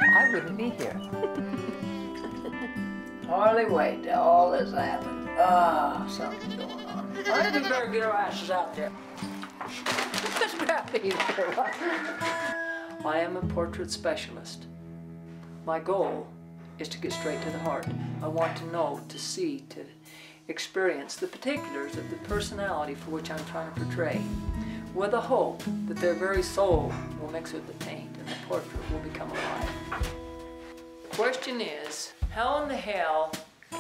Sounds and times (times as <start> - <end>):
Speech: 0.0 - 1.0, 3.3 - 8.9, 10.2 - 12.1, 13.0 - 14.7, 15.7 - 19.9, 20.5 - 24.2, 25.0 - 29.7, 31.1 - 33.4
Music: 0.0 - 33.8
Bleat: 6.1 - 8.0.